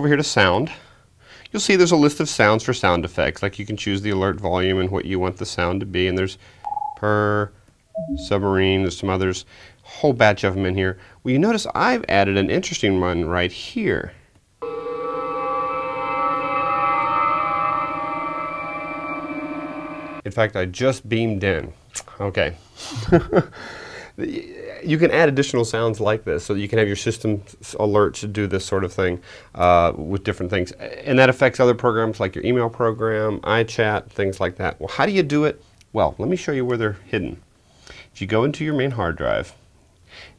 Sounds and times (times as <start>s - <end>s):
Speech: 0.0s - 0.9s, 1.5s - 6.4s, 7.0s - 7.5s, 8.1s - 14.2s, 20.2s - 22.6s, 24.2s - 37.4s, 38.1s - 39.6s.